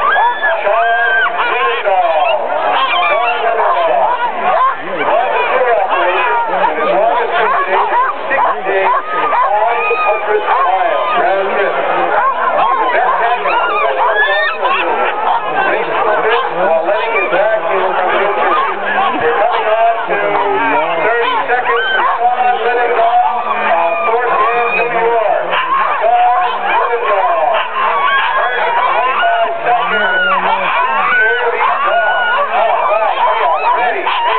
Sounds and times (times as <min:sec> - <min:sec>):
Bow-wow: 0:00.0 - 0:34.3
Speech: 0:00.0 - 0:34.3.